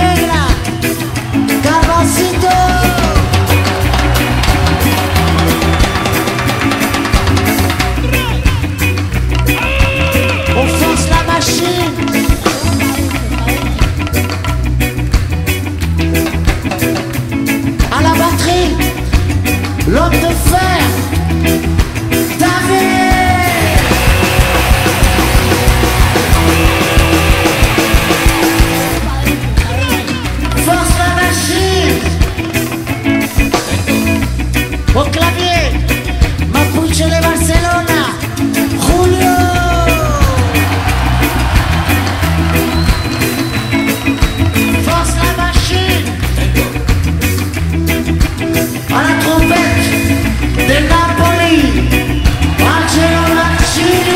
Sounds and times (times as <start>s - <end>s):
Ska: 0.0s - 54.1s.